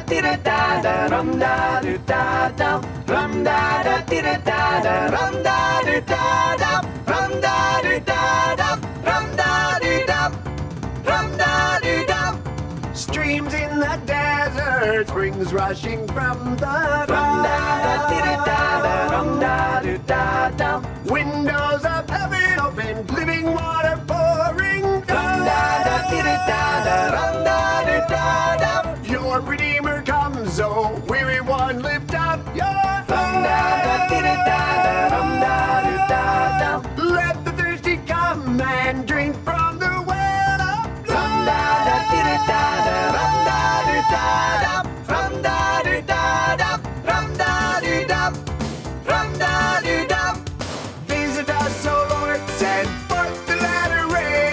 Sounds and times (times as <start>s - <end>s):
Music: 0.0s - 54.5s.